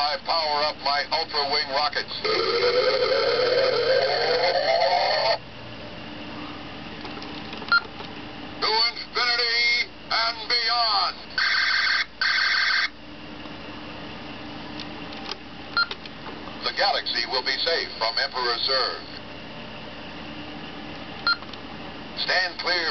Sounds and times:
Speech: 0:00.0 - 0:02.3, 0:08.6 - 0:11.3, 0:16.6 - 0:19.2, 0:22.2 - 0:22.9.

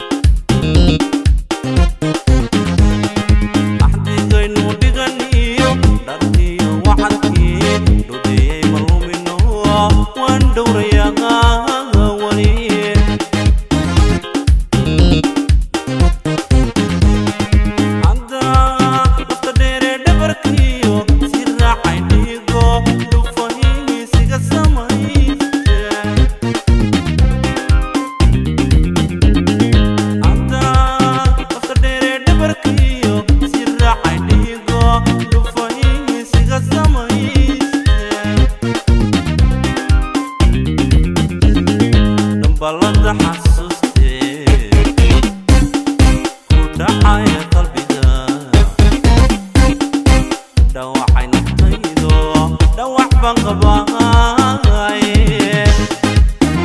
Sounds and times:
Jazz: 0:00.0 - 0:04.8, 0:05.4 - 0:08.9, 0:12.0 - 0:19.1, 0:24.2 - 0:31.3, 0:34.1 - 0:43.4, 0:44.5 - 0:47.6, 0:48.6 - 0:50.5, 0:53.4 - 0:56.6
Funk: 0:00.0 - 0:56.6.

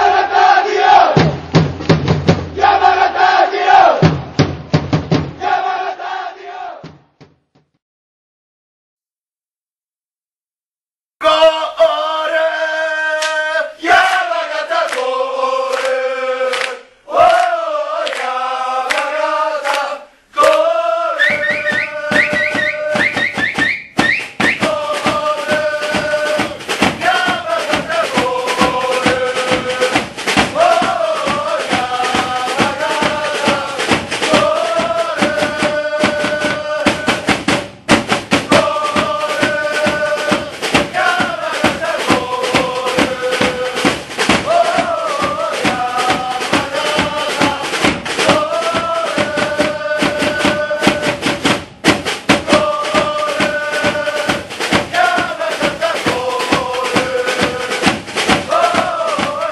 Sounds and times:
Chant: 0:11.2 - 0:23.4, 0:24.5 - 0:37.4, 0:38.5 - 0:51.4, 0:52.4 - 0:59.5.

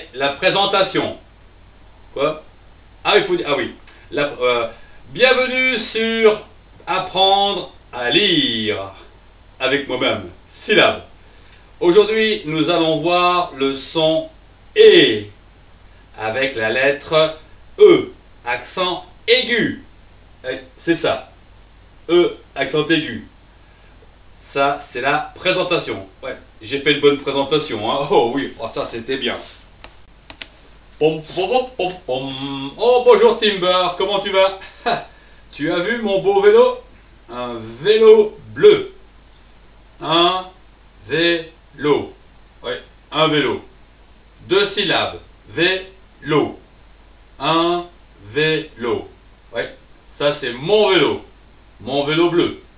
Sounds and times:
Speech: 0:00.0 - 0:01.2, 0:02.2 - 0:11.1, 0:11.8 - 0:15.4, 0:16.2 - 0:21.4, 0:22.1 - 0:23.3, 0:24.4 - 0:29.6, 0:31.0 - 0:39.0, 0:40.0 - 0:43.7, 0:44.4 - 0:46.6, 0:47.4 - 0:52.6.

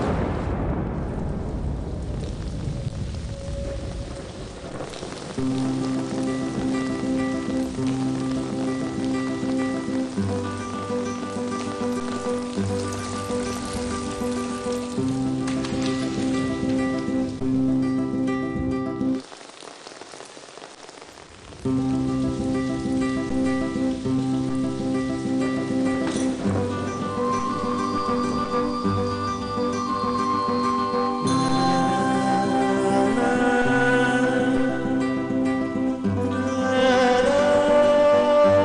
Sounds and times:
Music: 0:02.6 - 0:19.3, 0:21.6 - 0:38.6.

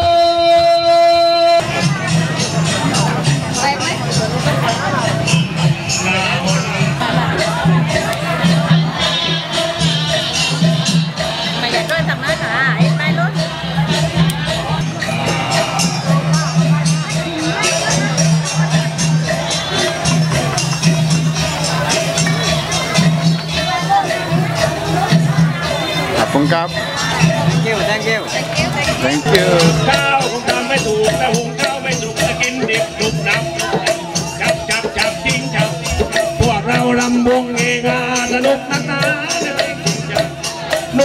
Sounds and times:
Speech: 0:00.0 - 0:09.4, 0:11.4 - 0:40.3
Wedding music: 0:00.0 - 0:41.0.

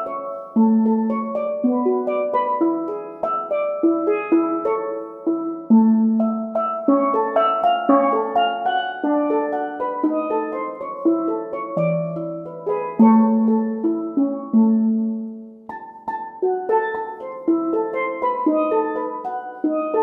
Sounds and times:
Classical music: 0:00.0 - 0:20.0
Musical instrument: 0:00.0 - 0:20.0.

